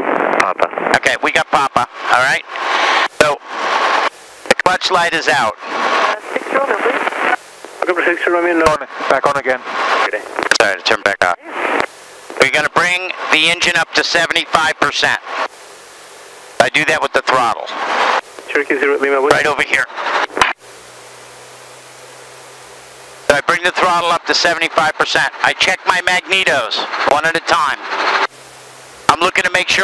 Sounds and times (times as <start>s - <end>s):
Speech: 0.4s - 2.4s, 4.5s - 7.0s, 7.8s - 11.5s, 12.4s - 15.2s, 16.6s - 17.7s, 18.5s - 19.9s, 23.3s - 27.8s, 29.1s - 29.8s.